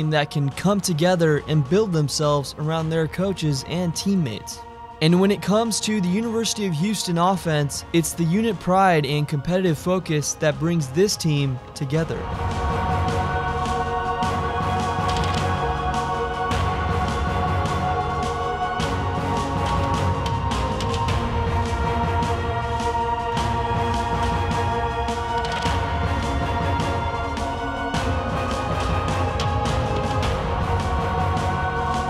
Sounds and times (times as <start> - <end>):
Speech: 0.0 - 12.3
Music: 0.0 - 32.0.